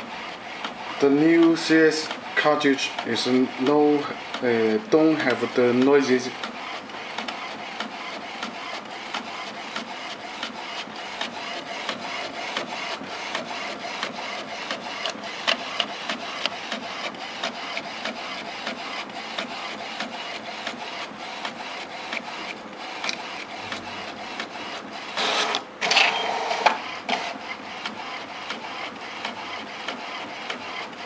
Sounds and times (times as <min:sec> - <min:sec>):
Printer: 0:00.0 - 0:31.0.